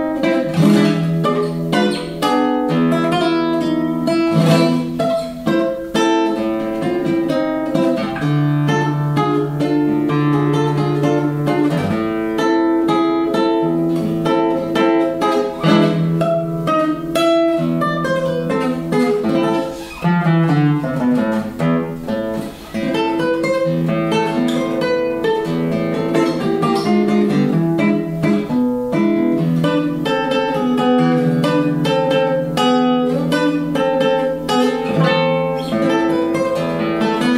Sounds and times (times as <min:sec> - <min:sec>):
Acoustic guitar: 0:00.0 - 0:37.3.